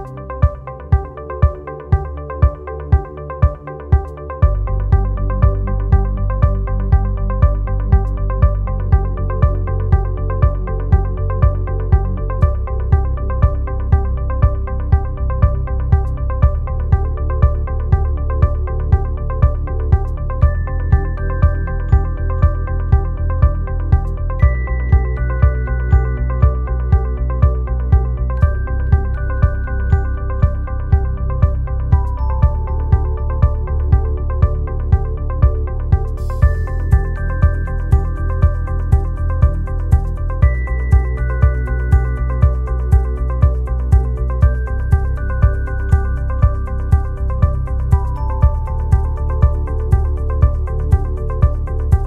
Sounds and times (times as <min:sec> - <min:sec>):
Music: 0:00.0 - 0:52.0.